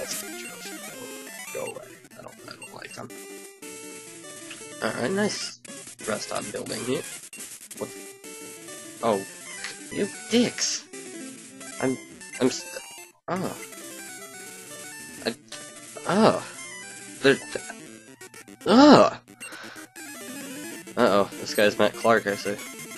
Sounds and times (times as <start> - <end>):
Speech: 0.0 - 0.9, 1.5 - 3.1, 4.8 - 7.0, 9.0 - 9.2, 9.9 - 10.8, 11.8 - 13.6, 16.0 - 16.5, 17.2 - 17.7, 18.7 - 19.2, 21.0 - 22.6
Music: 0.0 - 22.9.